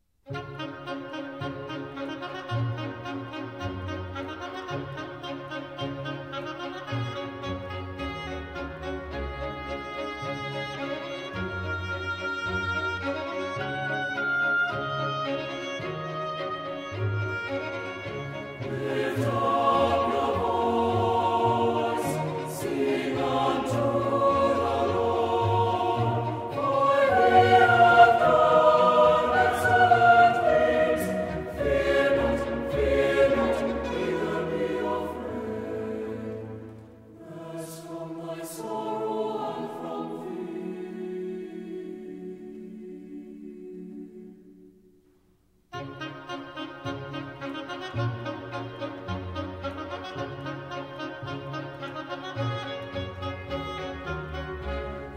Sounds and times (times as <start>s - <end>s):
Choir: 18.5s - 45.1s.